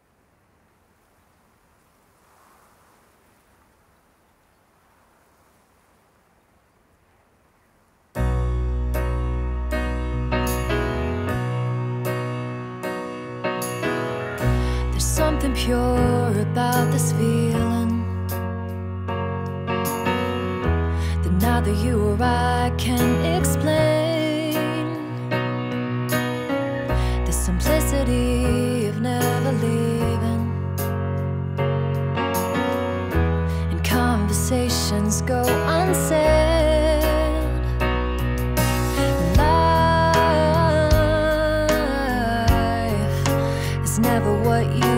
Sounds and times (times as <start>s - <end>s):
Sad music: 8.2s - 44.9s.